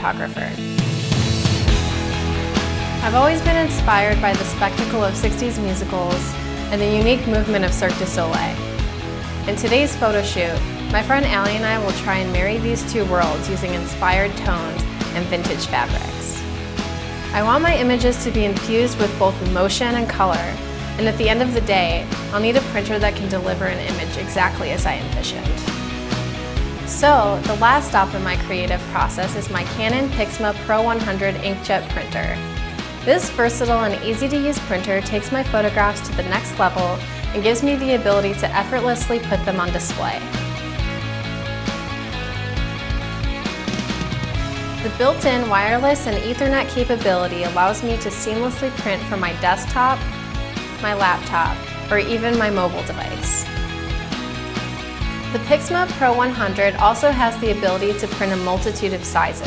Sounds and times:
Speech: 0:00.0 - 0:00.6, 0:03.0 - 0:08.6, 0:09.5 - 0:16.4, 0:17.4 - 0:25.7, 0:26.9 - 0:32.4, 0:33.1 - 0:40.2, 0:44.8 - 0:50.0, 0:50.8 - 0:53.4, 0:55.4 - 0:59.4
Music: 0:00.0 - 0:59.4.

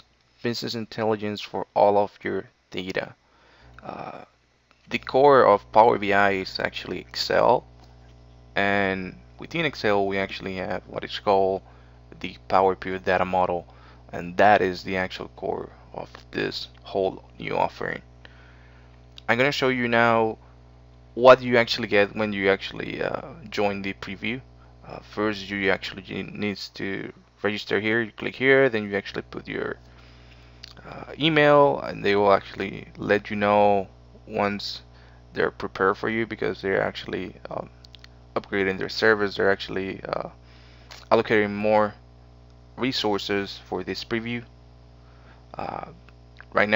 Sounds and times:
Speech: 0:00.0 - 0:03.2, 0:03.8 - 0:04.3, 0:04.9 - 0:07.6, 0:08.6 - 0:11.6, 0:12.2 - 0:18.1, 0:19.2 - 0:20.4, 0:21.2 - 0:29.8, 0:30.6 - 0:37.8, 0:38.4 - 0:42.0, 0:42.8 - 0:44.5, 0:45.6 - 0:46.7.

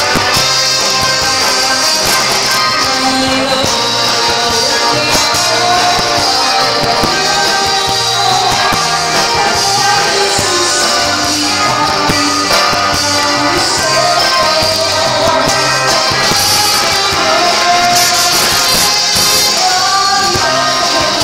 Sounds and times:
Music: 0:00.0 - 0:21.2
Singing: 0:00.9 - 0:21.2.

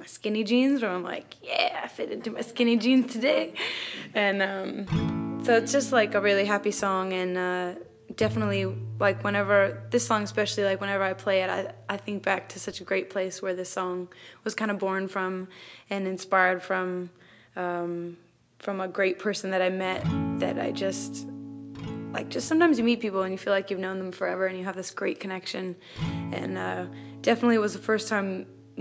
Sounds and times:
Speech: 0:00.0 - 0:04.9, 0:05.5 - 0:21.3, 0:22.2 - 0:28.8
Music: 0:04.9 - 0:07.1, 0:07.8 - 0:11.9, 0:20.0 - 0:22.9, 0:26.0 - 0:28.8.

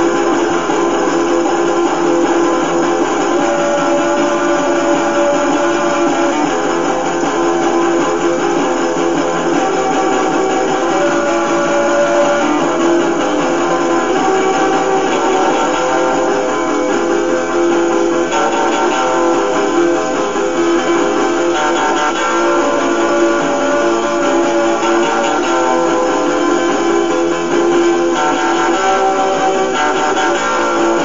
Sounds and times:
Acoustic guitar: 0:00.0 - 0:31.0.

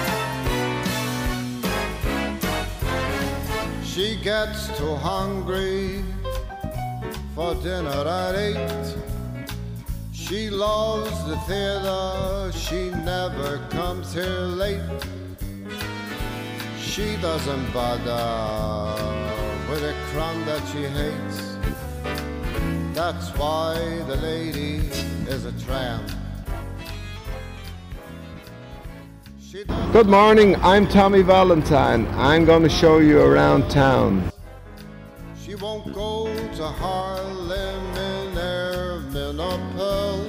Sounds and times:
Music: 0:00.0 - 0:40.2
Male singing: 0:03.8 - 0:06.2, 0:07.4 - 0:09.0, 0:10.2 - 0:15.1, 0:16.8 - 0:21.6, 0:22.9 - 0:26.2, 0:35.4 - 0:40.2
Speech: 0:29.7 - 0:34.3.

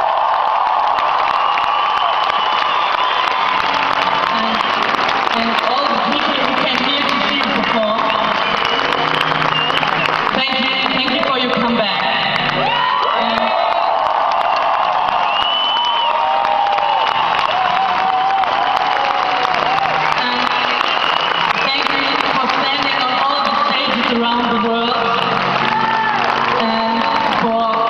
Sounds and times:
Music: 0:03.3 - 0:13.8, 0:15.2 - 0:27.8
Female speech, woman speaking: 0:05.4 - 0:08.1, 0:10.4 - 0:12.1, 0:21.7 - 0:25.2, 0:26.6 - 0:27.8.

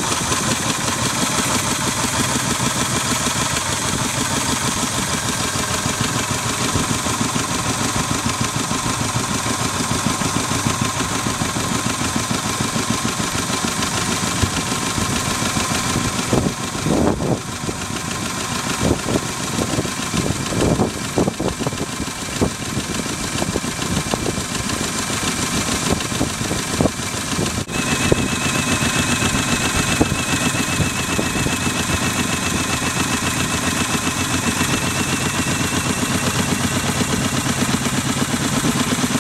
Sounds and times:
Boat, Water vehicle: 0:00.0 - 0:39.2
Engine: 0:00.0 - 0:39.2
Outside, rural or natural: 0:00.0 - 0:39.2.

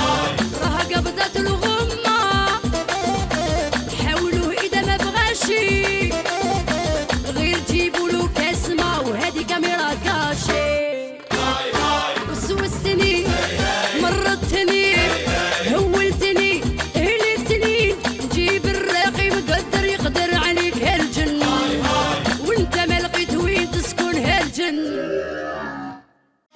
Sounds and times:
Music: 0:00.0 - 0:24.9, 0:26.0 - 0:26.5.

